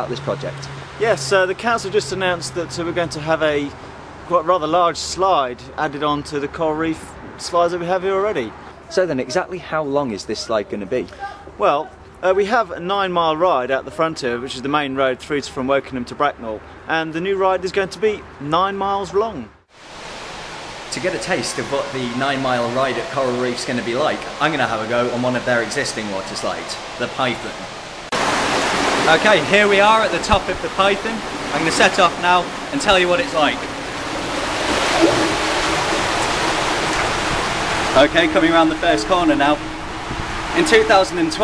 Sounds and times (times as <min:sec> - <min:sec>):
Speech: 0:00.0 - 0:03.7, 0:04.3 - 0:19.5, 0:20.9 - 0:27.6, 0:29.1 - 0:33.6, 0:38.0 - 0:39.6, 0:40.6 - 0:41.4.